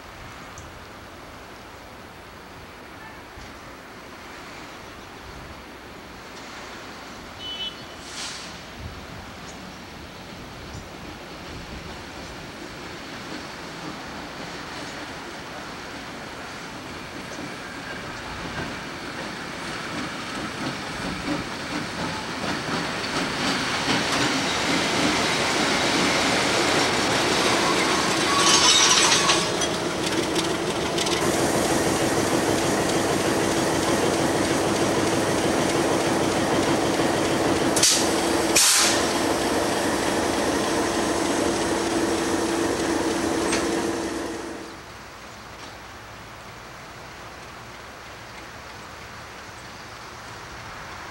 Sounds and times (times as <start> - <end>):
Railroad car, train wagon: 0.0 - 51.1
Train: 0.0 - 51.1.